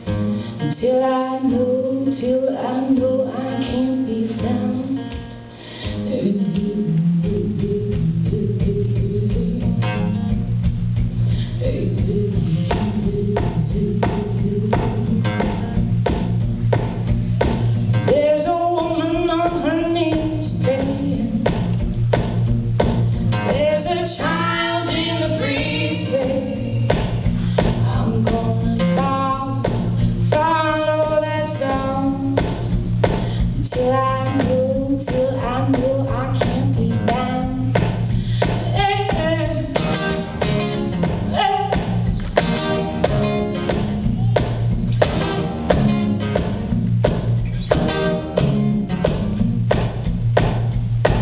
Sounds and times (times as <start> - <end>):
Music: 0.0 - 51.2.